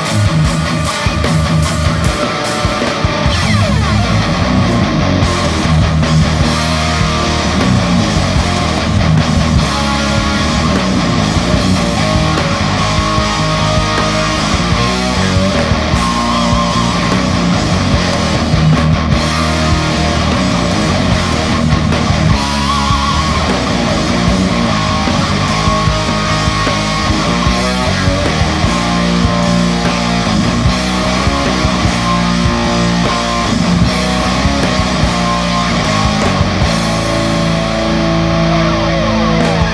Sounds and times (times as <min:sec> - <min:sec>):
Heavy metal: 0:00.0 - 0:39.7.